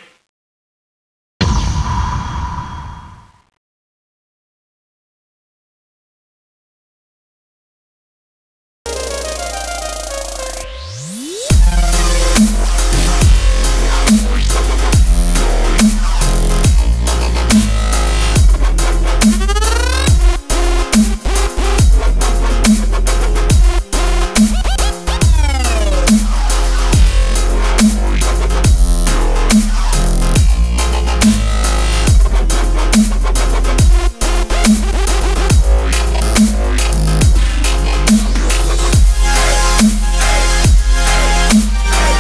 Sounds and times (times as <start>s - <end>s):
Music: 8.9s - 42.2s.